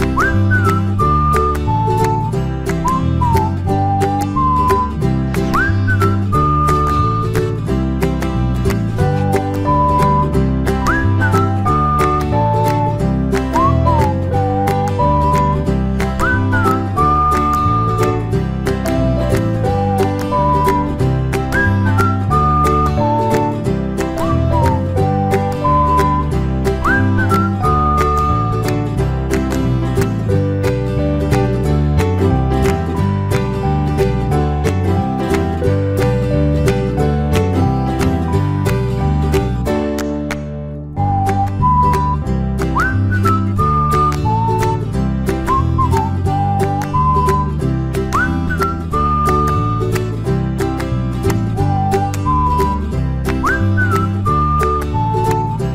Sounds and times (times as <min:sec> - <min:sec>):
Music: 0:00.0 - 0:55.7.